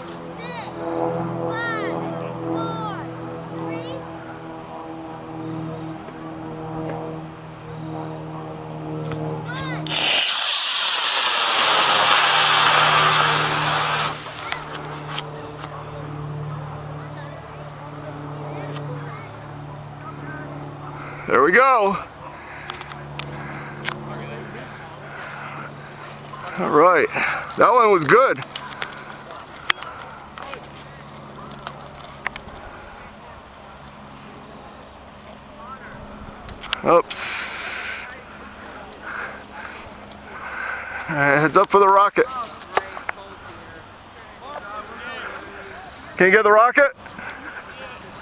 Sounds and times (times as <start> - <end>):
Vehicle: 0.0 - 48.2.